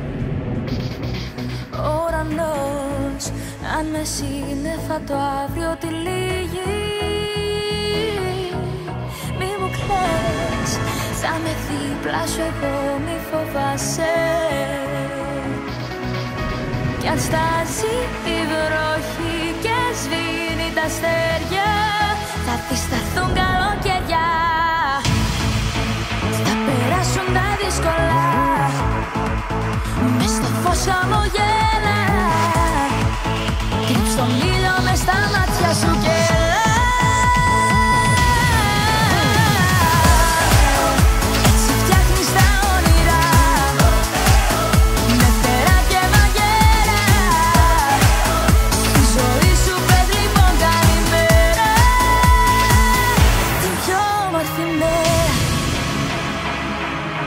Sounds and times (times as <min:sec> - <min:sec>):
Music: 0:00.0 - 0:57.2.